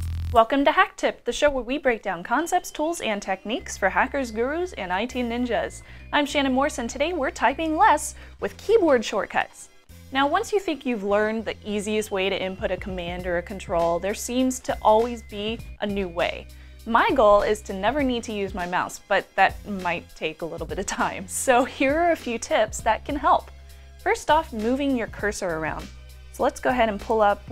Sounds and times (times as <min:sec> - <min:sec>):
Music: 0:00.0 - 0:27.5
Speech: 0:00.4 - 0:23.5, 0:24.1 - 0:27.5.